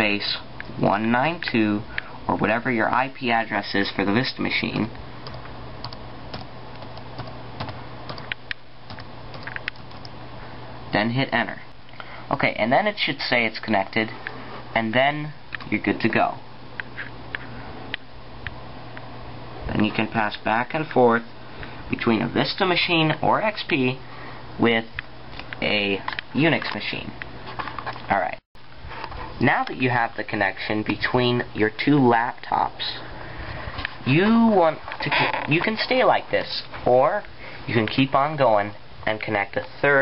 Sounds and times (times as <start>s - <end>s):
Speech: 0.0s - 5.0s, 10.9s - 11.7s, 12.3s - 16.4s, 19.6s - 21.3s, 21.9s - 24.0s, 24.6s - 25.0s, 25.6s - 27.2s, 28.1s - 28.4s, 29.4s - 33.1s, 34.0s - 40.0s
Inside, small room: 0.0s - 40.0s.